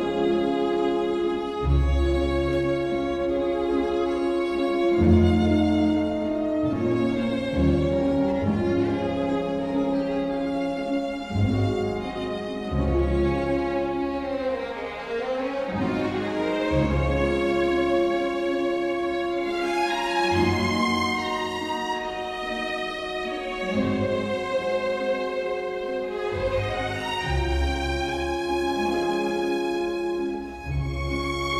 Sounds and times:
Music: 0.0 - 31.5.

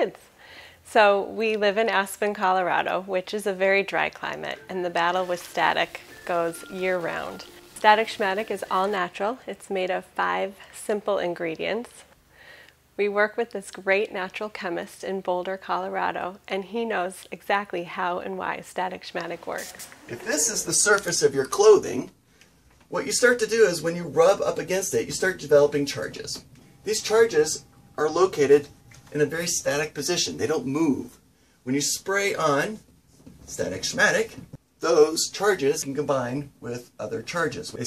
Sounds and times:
Speech: 0.9 - 12.1, 13.0 - 22.1, 22.9 - 32.8, 33.5 - 37.8
Spray: 19.6 - 20.1.

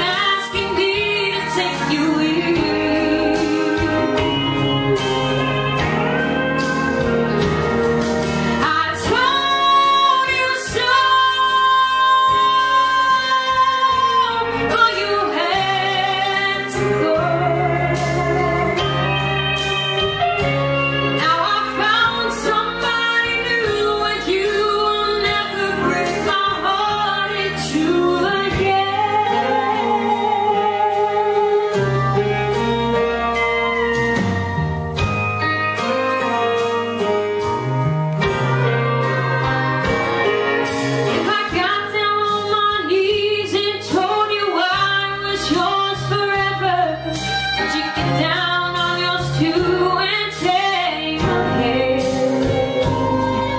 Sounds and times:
Music: 0.0 - 53.5.

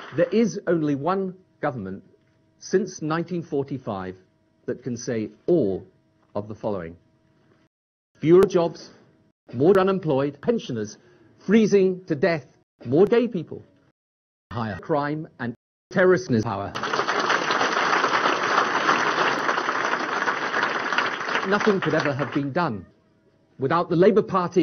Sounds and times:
Narration, monologue: 0.0 - 13.9, 14.5 - 16.8, 21.4 - 24.6
Male speech, man speaking: 0.2 - 7.0, 8.2 - 13.7, 14.5 - 16.8, 21.4 - 22.9, 23.6 - 24.6.

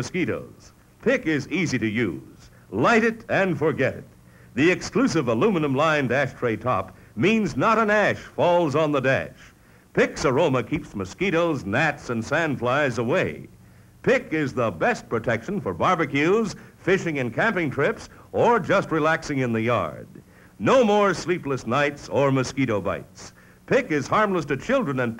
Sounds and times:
Speech: 0.0 - 25.1.

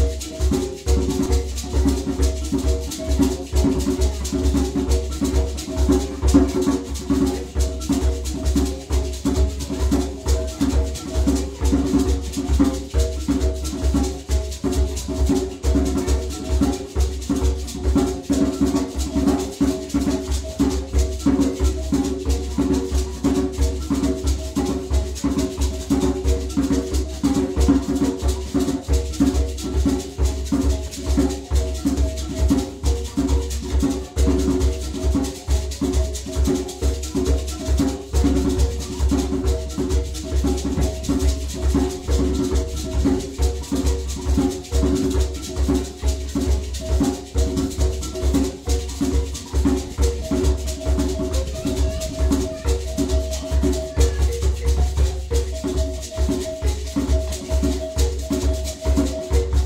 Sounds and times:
Music: 0.0 - 59.6.

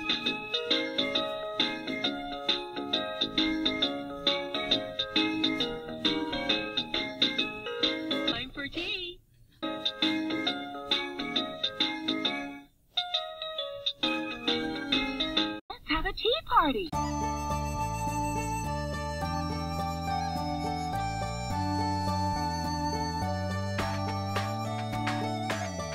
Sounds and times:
Music: 0.0 - 8.5, 9.5 - 15.6, 16.9 - 25.9
Speech: 8.3 - 9.2, 15.7 - 17.0.

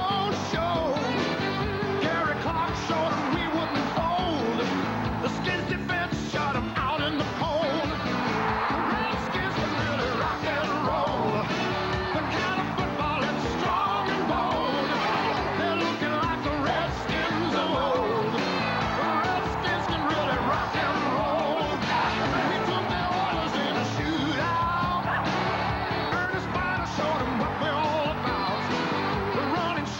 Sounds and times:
Rock and roll: 0.0 - 29.9.

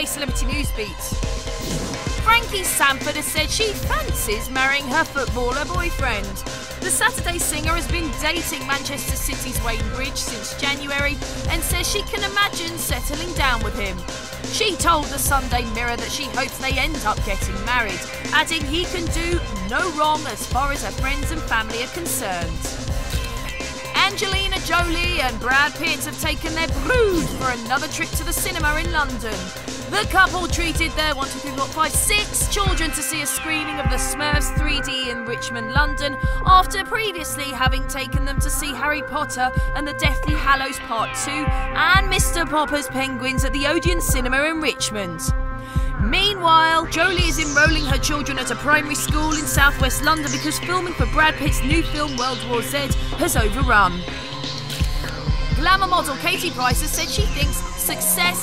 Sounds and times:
Speech: 0.0 - 1.2, 2.2 - 22.5, 23.9 - 45.4, 46.0 - 54.0, 55.6 - 58.4
Music: 0.0 - 58.4.

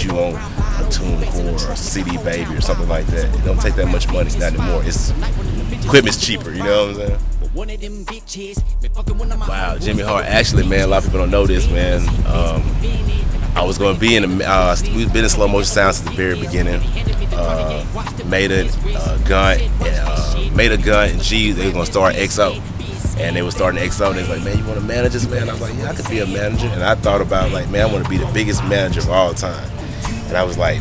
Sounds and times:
Speech: 0.0 - 5.2, 5.9 - 7.2, 9.4 - 30.8
Music: 0.0 - 30.8.

